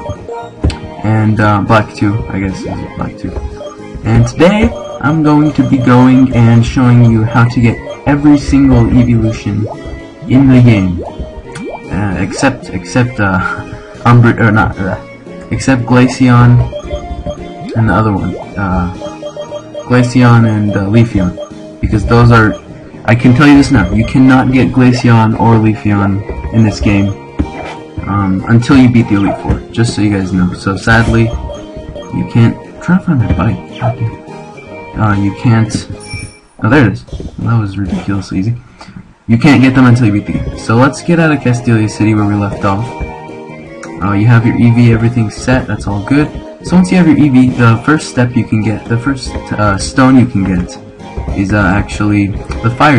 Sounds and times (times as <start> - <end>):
Music: 0.0 - 37.6, 39.3 - 52.9
Speech: 1.0 - 3.4, 4.0 - 9.7, 10.3 - 11.0, 11.9 - 16.8, 17.7 - 19.0, 19.8 - 27.2, 28.0 - 31.4, 32.1 - 34.2, 35.0 - 36.0, 36.6 - 38.6, 39.3 - 42.9, 43.9 - 50.8, 51.4 - 52.9.